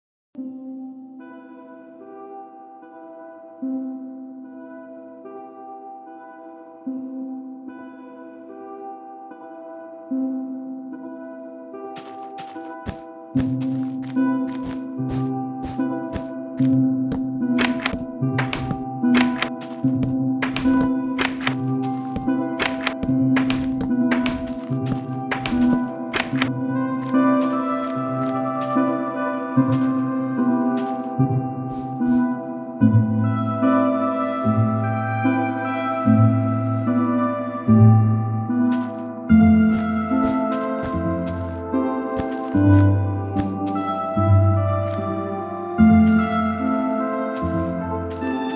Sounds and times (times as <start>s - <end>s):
Music: 0.4s - 48.5s.